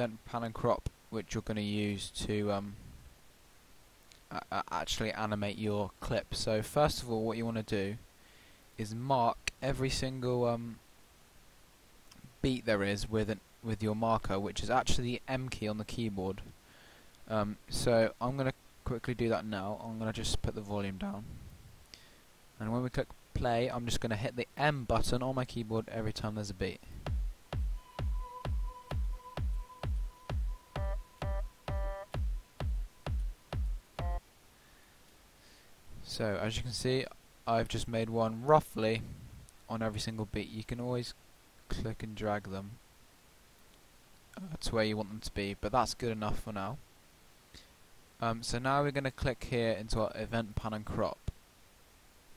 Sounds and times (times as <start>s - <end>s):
Speech: 0.0s - 2.8s, 4.3s - 8.0s, 8.8s - 10.8s, 12.3s - 16.5s, 17.3s - 21.4s, 22.6s - 26.9s, 36.0s - 39.1s, 39.7s - 42.8s, 44.4s - 46.8s, 48.2s - 51.3s.